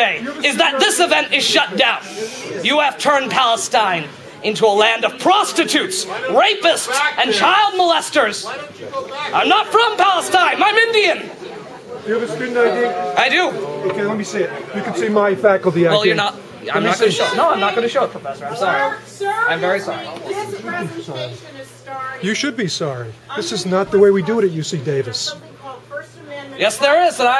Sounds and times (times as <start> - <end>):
Male speech, man speaking: 0.0 - 21.4, 22.2 - 25.4, 26.6 - 27.3
Conversation: 0.0 - 27.3
Female speech, woman speaking: 15.9 - 22.4, 23.3 - 27.3.